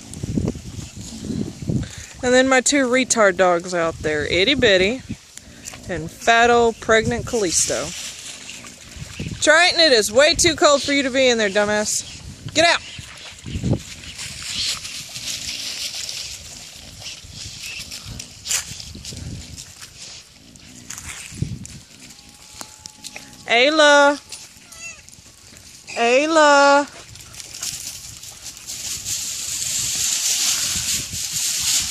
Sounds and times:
Speech: 2.2s - 5.0s, 5.9s - 7.9s, 9.4s - 12.0s, 12.6s - 12.8s, 23.5s - 24.2s, 25.9s - 27.0s
Animal: 7.9s - 9.8s, 10.7s - 26.2s.

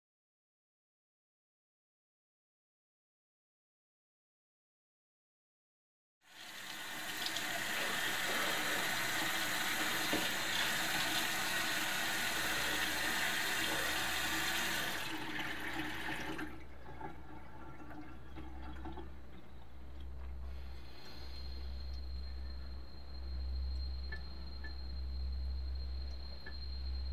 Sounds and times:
Sink (filling or washing): 6.3s - 19.2s
Water tap, faucet: 6.3s - 19.2s
Water: 6.3s - 20.2s.

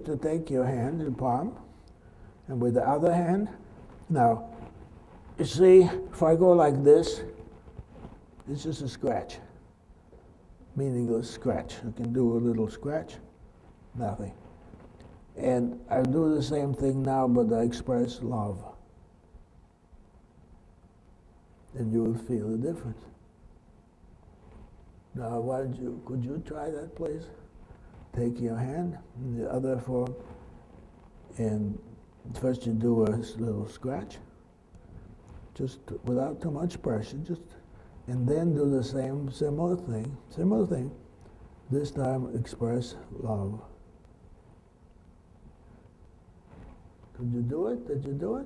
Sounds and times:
Speech: 0.0s - 1.7s, 2.5s - 4.6s, 5.4s - 7.4s, 8.4s - 9.6s, 10.7s - 13.3s, 13.9s - 14.4s, 15.4s - 18.9s, 21.7s - 23.2s, 25.1s - 27.4s, 28.1s - 30.3s, 31.3s - 34.3s, 35.5s - 41.0s, 41.7s - 43.8s, 47.1s - 48.4s.

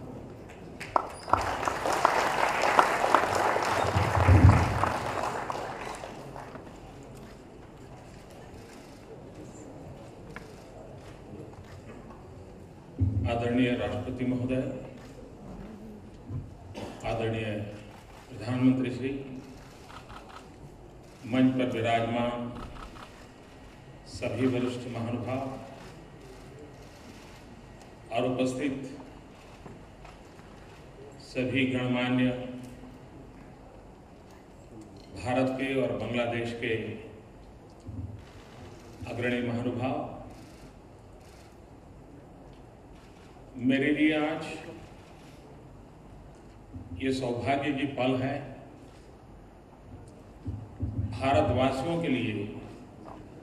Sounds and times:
Narration, monologue: 6.7s - 53.4s
Male speech, man speaking: 13.2s - 15.0s, 17.0s - 19.4s, 21.3s - 22.6s, 24.1s - 25.8s, 28.1s - 29.0s, 31.2s - 32.6s, 35.2s - 37.1s, 39.1s - 40.3s, 43.6s - 44.8s, 47.0s - 48.6s, 51.2s - 52.8s.

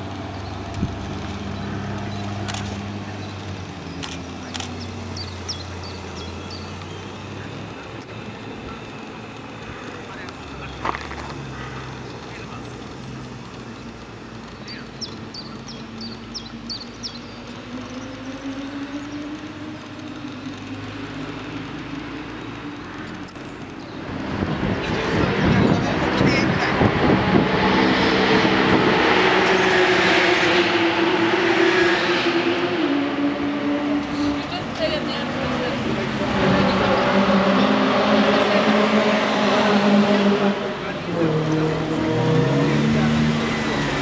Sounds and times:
Car: 0.0s - 44.0s
Speech: 24.7s - 26.7s, 34.3s - 37.1s.

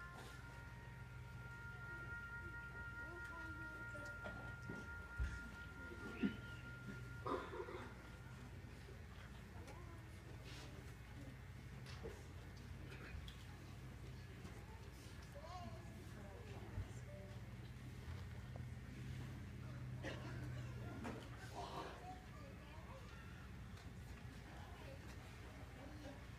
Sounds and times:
Music: 0.0s - 10.4s.

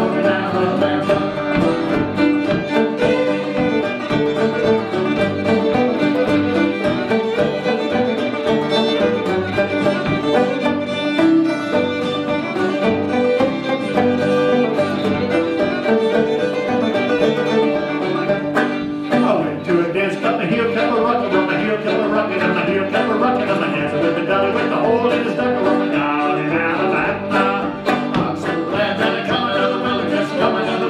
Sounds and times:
Pizzicato: 0.0s - 30.9s.

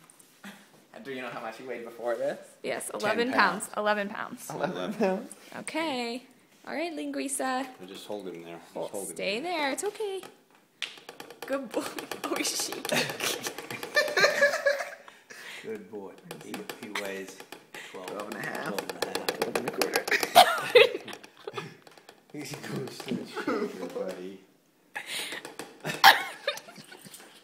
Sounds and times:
Laughter: 12.9s - 15.2s, 20.1s - 21.8s, 23.3s - 23.9s, 25.8s - 27.4s.

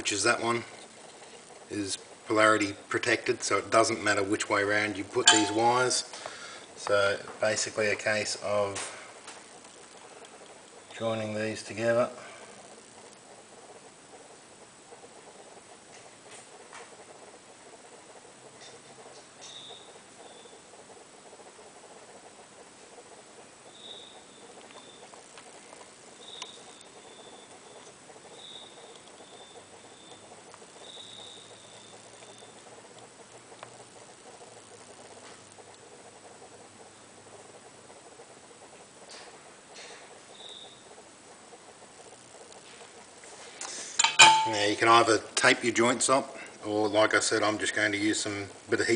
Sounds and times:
Inside, small room: 0.0s - 48.9s.

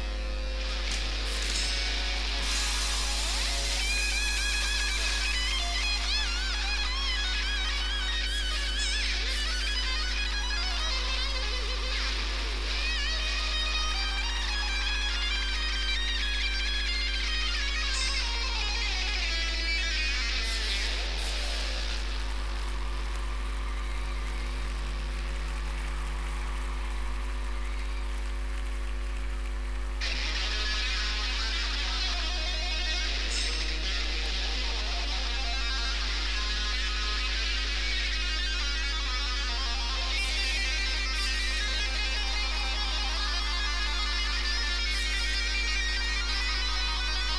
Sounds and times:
Music: 0.0s - 29.3s, 30.0s - 47.3s.

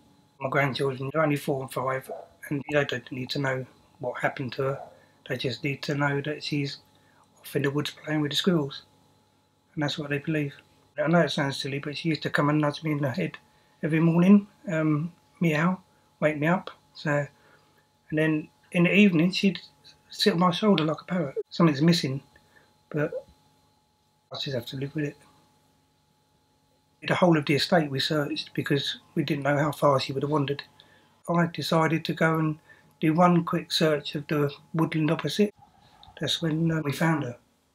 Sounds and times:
Speech: 0.4s - 6.8s, 7.4s - 8.9s, 9.8s - 17.4s, 18.1s - 22.3s, 22.9s - 23.3s, 24.3s - 25.2s, 27.0s - 30.7s, 31.3s - 35.6s, 36.2s - 37.4s.

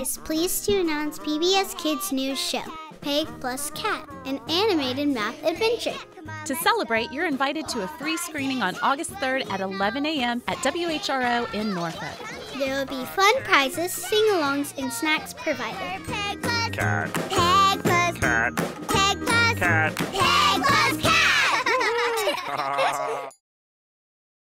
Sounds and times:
Music: 0.0s - 23.4s
Speech: 6.5s - 15.8s.

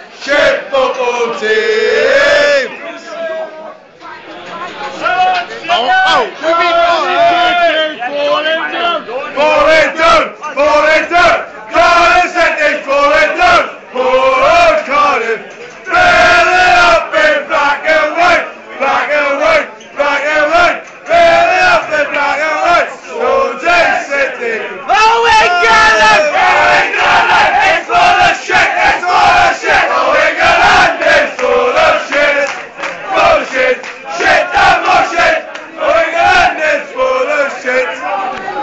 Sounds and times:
Male singing: 0.2s - 2.7s, 33.2s - 38.1s.

